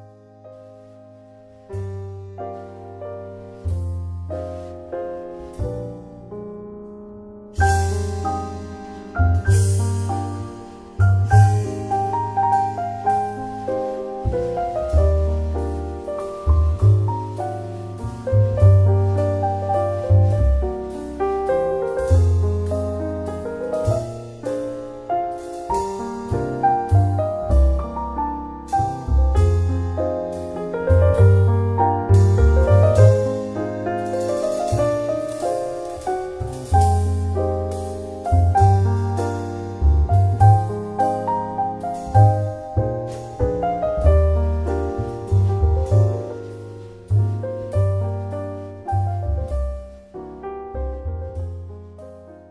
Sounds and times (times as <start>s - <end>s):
Music: 0.0s - 52.5s.